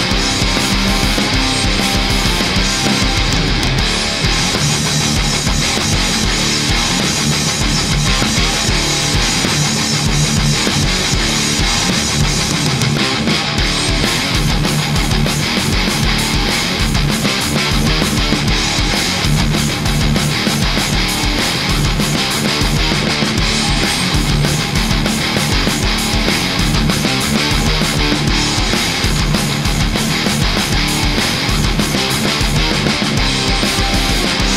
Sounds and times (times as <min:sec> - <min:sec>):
Electric guitar: 0:00.0 - 0:34.5.